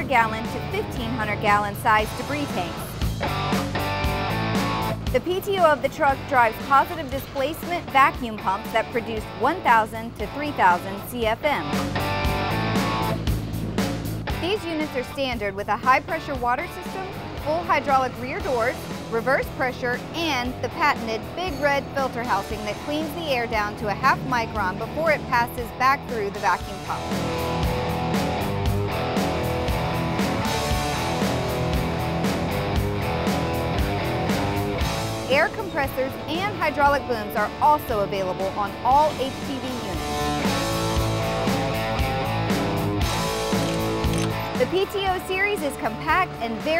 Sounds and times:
Speech: 0.0 - 2.9, 5.2 - 11.7, 14.4 - 27.0, 35.3 - 40.1, 44.6 - 46.8
Music: 0.0 - 46.8.

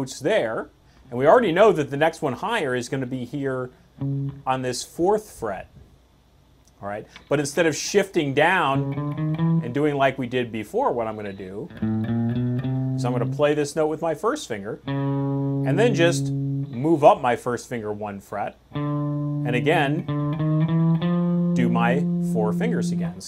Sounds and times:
Speech: 0.0 - 3.7, 4.4 - 5.8, 6.8 - 8.8, 9.6 - 11.7, 13.0 - 14.8, 15.7 - 18.6, 19.4 - 20.0, 21.6 - 23.2
Electric guitar: 4.0 - 4.5, 8.7 - 9.9, 11.7 - 13.4, 14.8 - 16.9, 18.7 - 23.2.

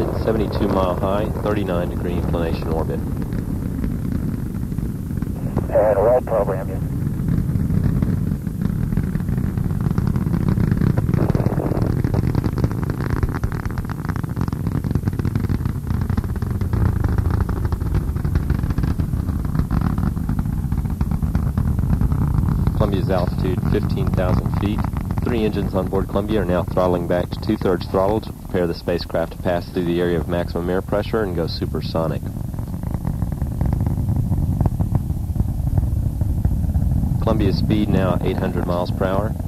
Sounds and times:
Aircraft: 0.0 - 39.4.

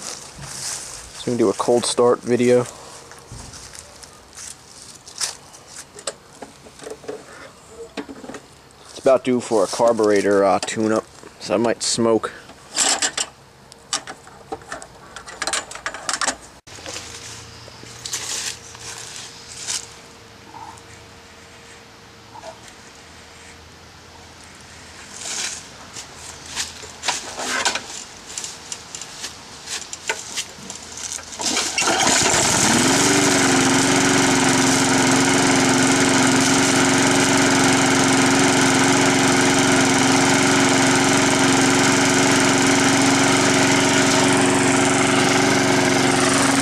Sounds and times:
Speech: 1.2 - 2.7, 8.9 - 12.4.

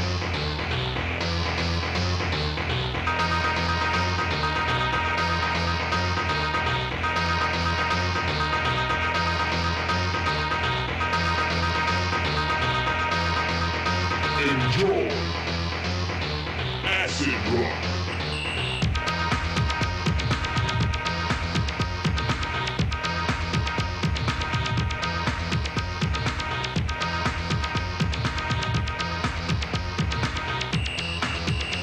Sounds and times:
Music: 0.0 - 31.8.

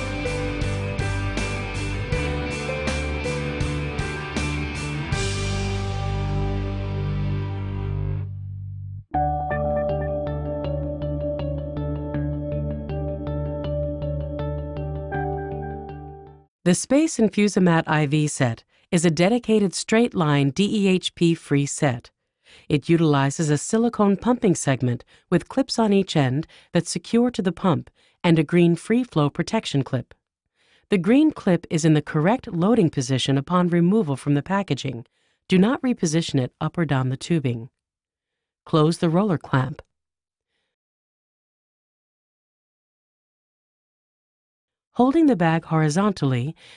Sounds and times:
Speech: 16.7 - 30.2, 30.9 - 37.7, 38.7 - 39.9, 45.0 - 46.6.

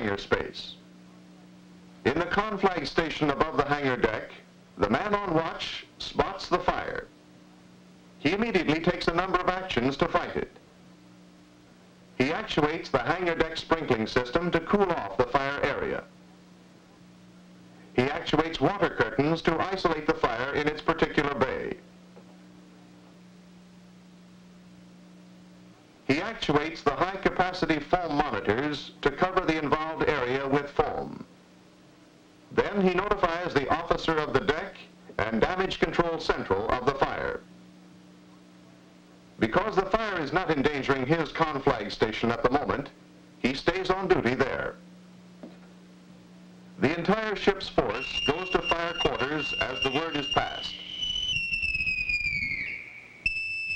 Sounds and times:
Fire alarm: 47.8 - 53.7.

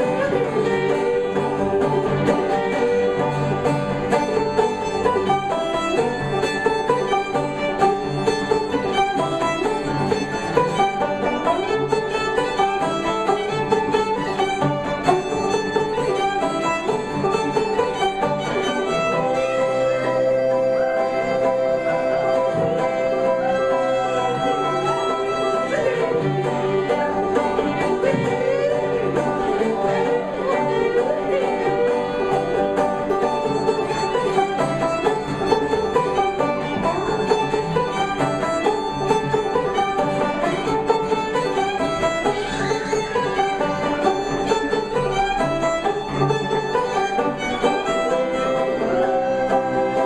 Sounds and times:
Banjo: 0.0 - 50.0
Bluegrass: 0.0 - 50.0
Guitar: 0.0 - 50.0.

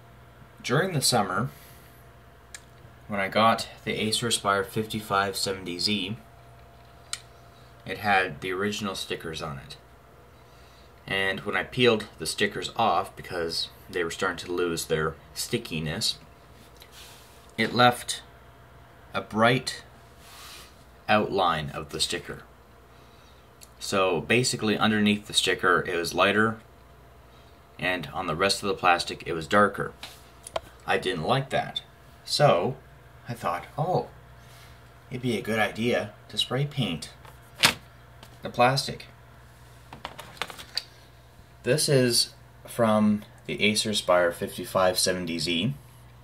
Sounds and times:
Speech: 0.6 - 1.6, 3.1 - 6.3, 7.8 - 9.9, 11.0 - 16.3, 17.6 - 18.3, 19.1 - 19.9, 21.1 - 22.5, 23.7 - 26.7, 27.8 - 30.0, 30.8 - 34.2, 35.1 - 37.2, 38.4 - 39.2, 41.6 - 45.9.

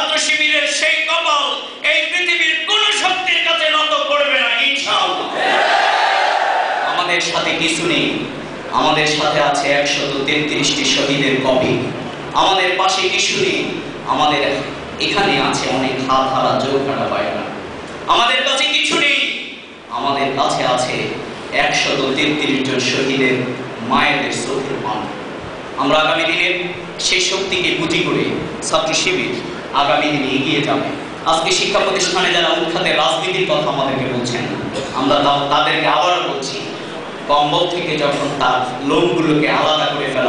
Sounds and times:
Male speech, man speaking: 0.0 - 5.3, 6.9 - 25.2, 25.8 - 40.2
Narration, monologue: 0.0 - 5.5, 6.8 - 40.2.

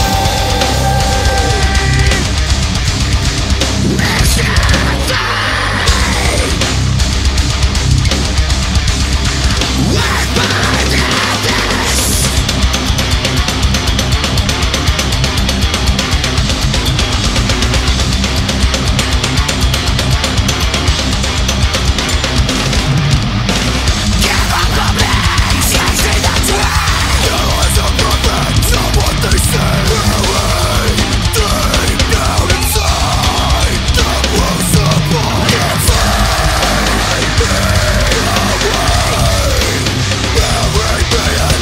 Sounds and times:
Heavy metal: 0.0 - 41.6.

